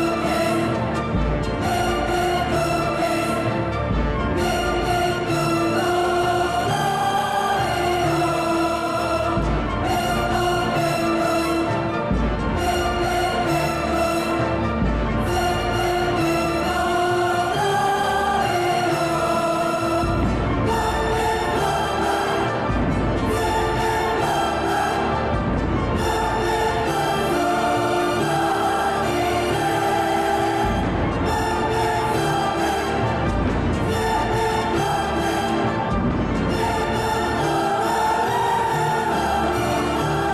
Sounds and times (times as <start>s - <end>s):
Music: 0.0s - 40.3s.